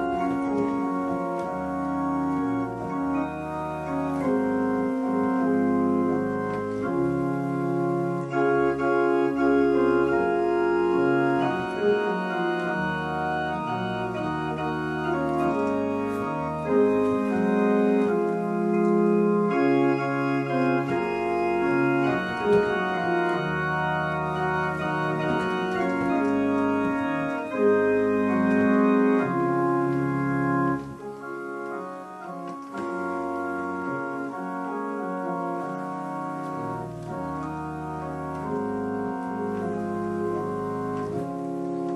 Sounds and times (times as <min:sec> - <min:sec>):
Electronic organ: 0:00.0 - 0:41.9.